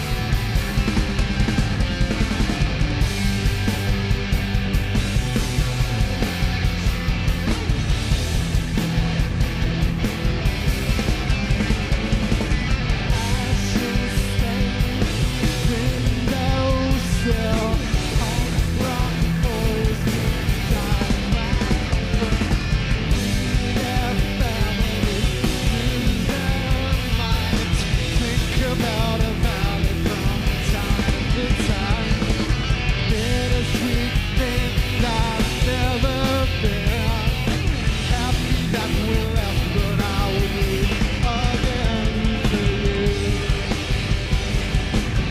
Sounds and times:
Music: 0.0 - 45.3.

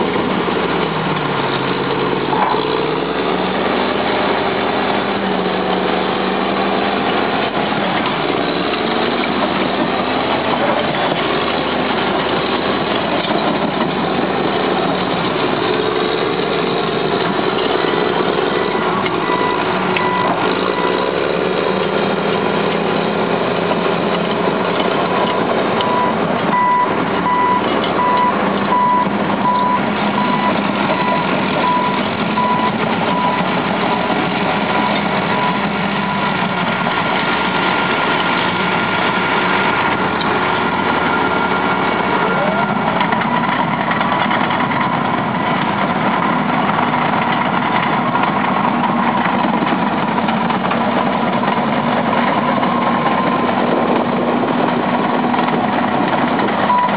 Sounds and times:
Truck: 0.0 - 56.9.

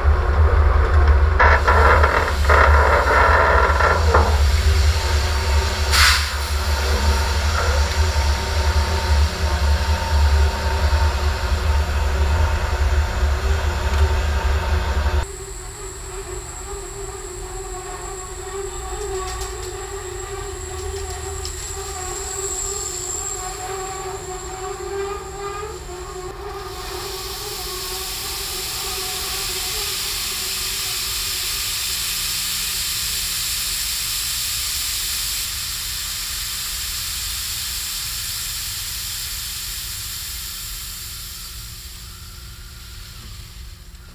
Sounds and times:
Outside, urban or manmade: 0.0 - 44.1.

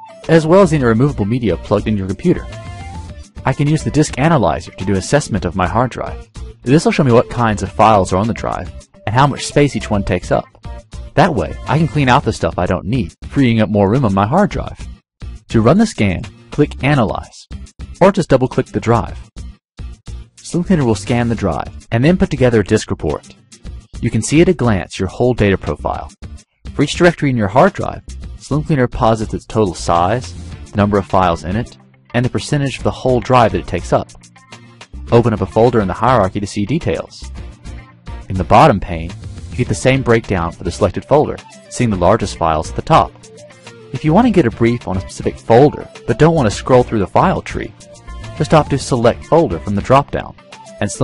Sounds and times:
Music: 0.0 - 51.0
Speech: 0.2 - 2.5, 3.4 - 10.5, 11.2 - 14.8, 15.5 - 19.2, 20.4 - 23.4, 24.0 - 26.2, 26.8 - 34.2, 35.1 - 37.3, 38.3 - 43.1, 44.0 - 47.7, 48.4 - 51.0.

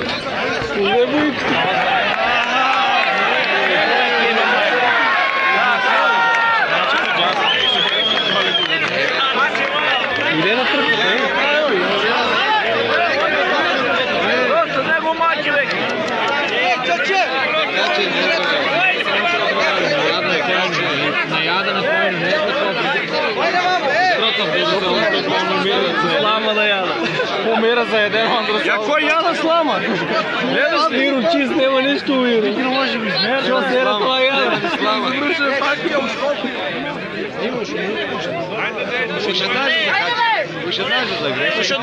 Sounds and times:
Chatter: 0.0 - 41.8
Speech: 0.0 - 41.8.

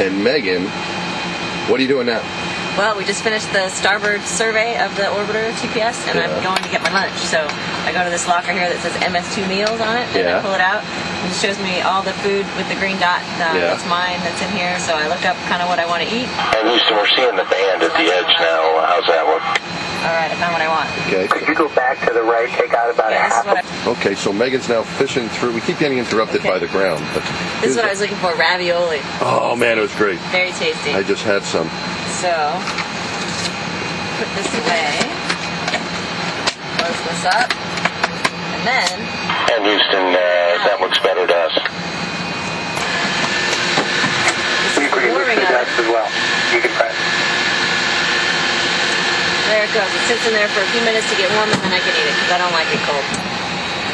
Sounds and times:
Speech: 0.0 - 0.7, 1.7 - 32.6, 38.6 - 41.7, 44.7 - 47.0, 49.5 - 53.1
Air conditioning: 0.0 - 53.9.

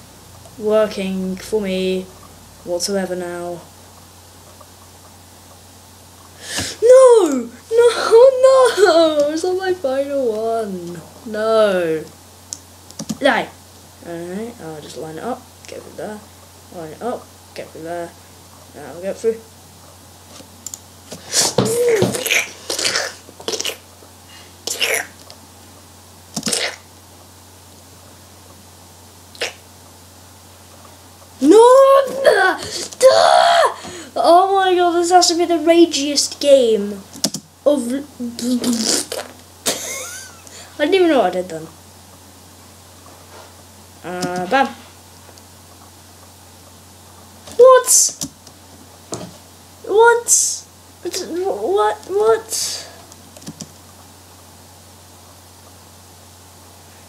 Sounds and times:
Speech: 0.6 - 3.7, 6.8 - 12.1, 13.2 - 19.5, 31.4 - 33.3, 34.2 - 37.1, 37.7 - 39.1, 40.8 - 41.8, 44.0 - 44.8, 47.6 - 48.2, 49.9 - 53.0.

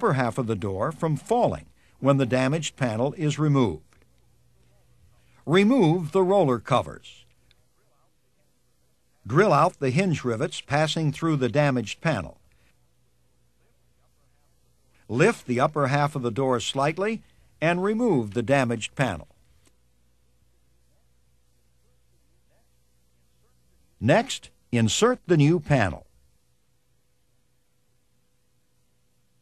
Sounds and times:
Speech: 0.0 - 3.9, 4.6 - 12.4, 13.6 - 19.4, 20.9 - 26.1.

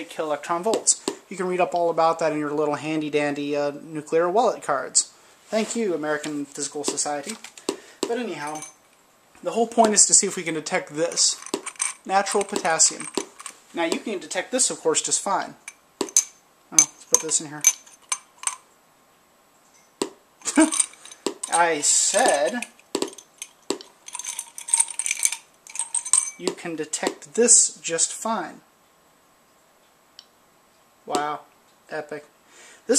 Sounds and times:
Speech: 0.0 - 7.4, 8.1 - 8.6, 9.4 - 11.4, 12.1 - 13.1, 13.7 - 15.6, 16.7 - 17.7, 21.5 - 22.7, 26.4 - 28.7, 31.1 - 32.3
Inside, small room: 0.0 - 32.9.

